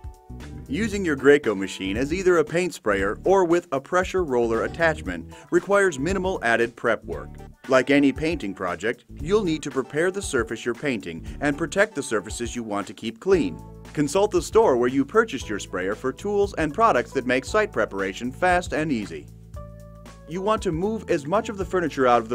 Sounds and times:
Music: 0.0s - 22.3s
Speech: 0.7s - 19.2s, 20.3s - 22.3s.

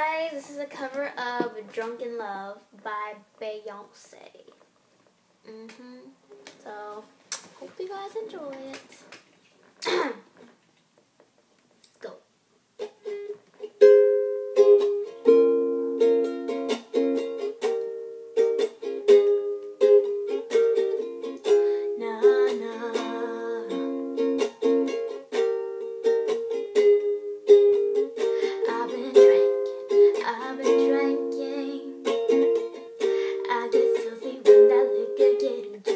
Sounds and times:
Speech: 0.0s - 4.6s, 5.5s - 9.0s, 11.9s - 12.3s
Inside, small room: 0.0s - 35.9s.

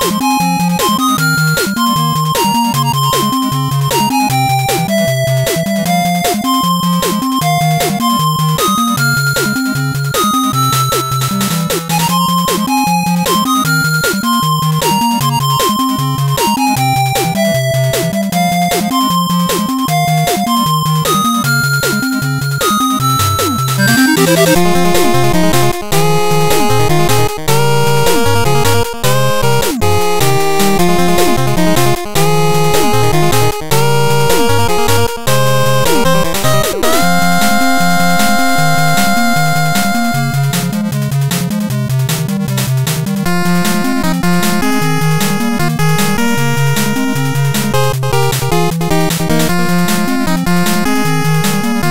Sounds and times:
Music: 0.0s - 51.9s.

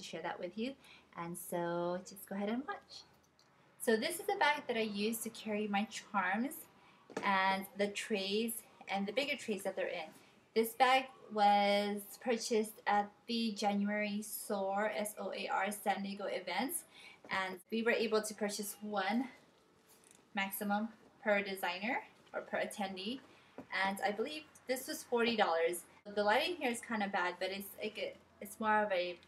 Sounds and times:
Speech: 0.0s - 3.1s, 3.8s - 19.4s, 20.4s - 29.2s.

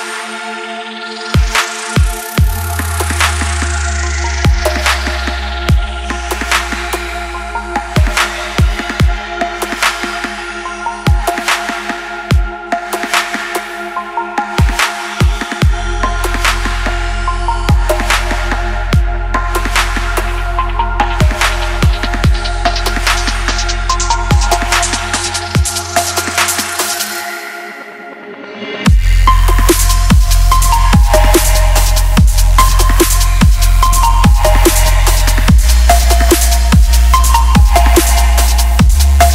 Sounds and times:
Music: 0.0s - 39.3s.

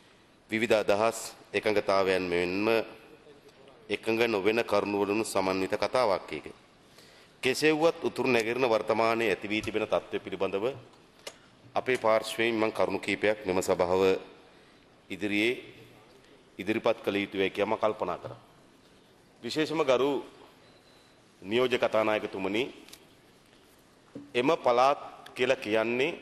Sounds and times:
Narration, monologue: 0.0s - 26.2s
Male speech, man speaking: 0.5s - 6.6s, 7.4s - 10.8s, 11.8s - 14.2s, 15.1s - 16.0s, 16.6s - 18.4s, 19.4s - 20.3s, 21.4s - 22.8s, 24.3s - 26.2s.

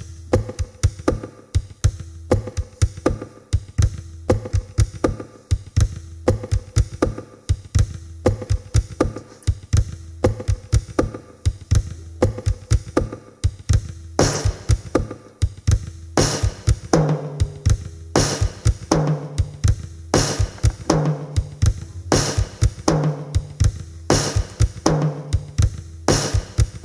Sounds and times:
Bass drum: 0.0s - 26.8s
Drum kit: 0.0s - 26.8s.

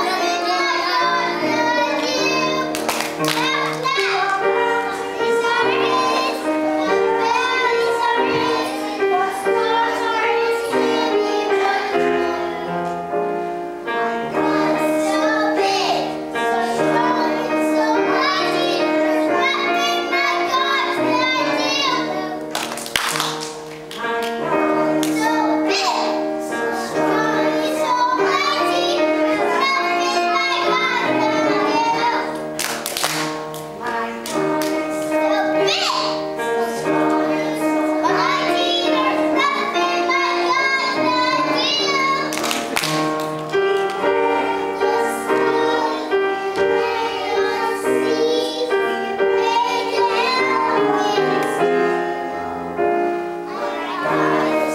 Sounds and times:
Child singing: 0.0s - 13.1s, 13.8s - 22.9s, 24.0s - 32.5s, 33.8s - 43.0s, 43.8s - 52.5s, 53.4s - 54.7s
Choir: 0.0s - 13.1s, 13.8s - 22.6s, 24.0s - 32.4s, 33.8s - 43.0s, 43.9s - 54.7s.

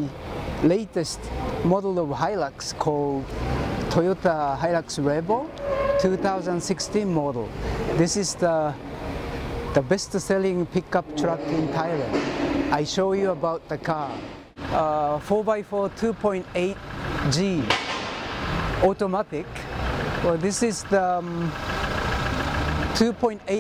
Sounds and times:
Speech: 0.0s - 3.2s, 3.9s - 8.8s, 9.8s - 17.7s, 18.8s - 19.6s, 20.2s - 21.6s, 23.0s - 23.6s
Vehicle: 0.0s - 23.6s.

